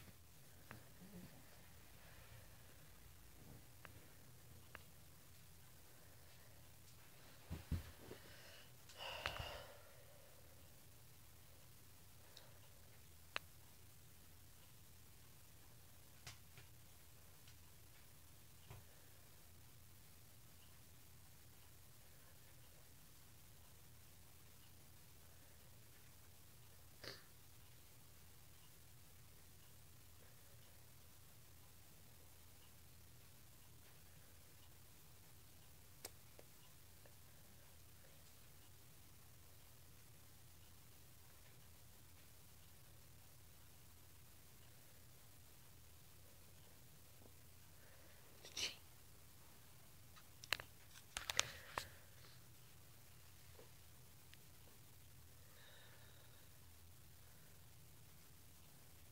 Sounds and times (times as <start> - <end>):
Breathing: 8.1 - 10.6, 51.2 - 52.5, 55.4 - 56.6.